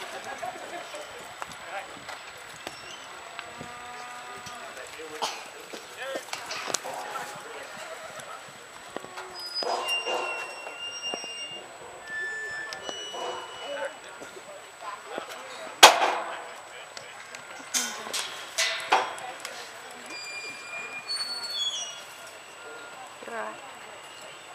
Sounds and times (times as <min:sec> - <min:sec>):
Speech: 0:04.2 - 0:08.7.